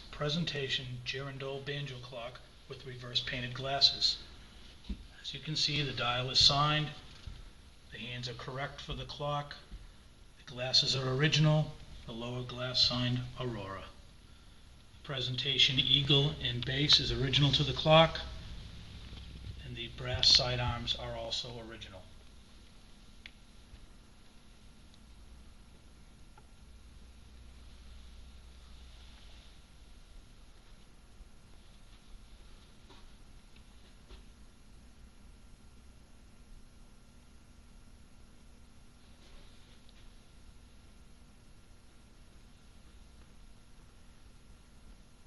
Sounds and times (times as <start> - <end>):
Speech: 0.1 - 4.3, 5.2 - 7.0, 7.9 - 9.7, 10.4 - 14.0, 15.0 - 18.4, 19.6 - 22.2.